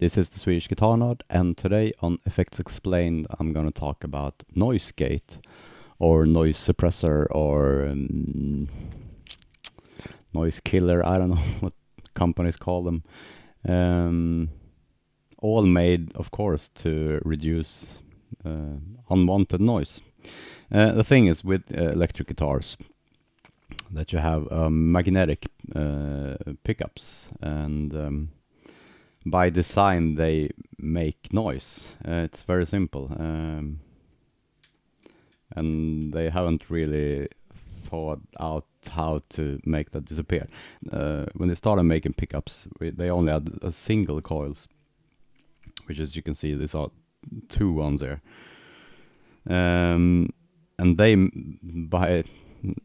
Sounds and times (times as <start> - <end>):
Speech: 0.0 - 5.4, 6.0 - 8.9, 10.3 - 14.6, 15.4 - 20.1, 20.7 - 22.9, 23.7 - 28.3, 29.2 - 33.8, 35.5 - 44.7, 45.7 - 48.2, 49.5 - 52.8.